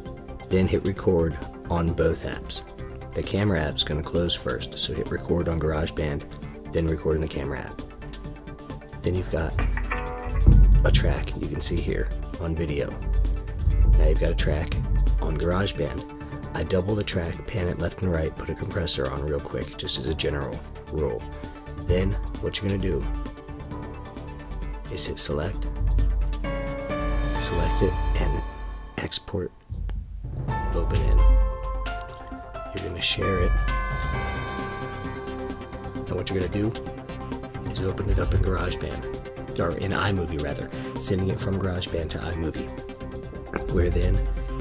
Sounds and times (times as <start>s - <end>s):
Music: 0.0s - 44.6s
Speech: 0.5s - 7.8s, 9.0s - 9.6s, 10.8s - 13.0s, 14.0s - 21.2s, 21.9s - 23.1s, 24.9s - 25.6s, 27.4s - 29.6s, 30.6s - 31.4s, 32.7s - 33.6s, 36.1s - 36.8s, 37.6s - 39.0s, 39.6s - 42.7s, 43.6s - 44.3s.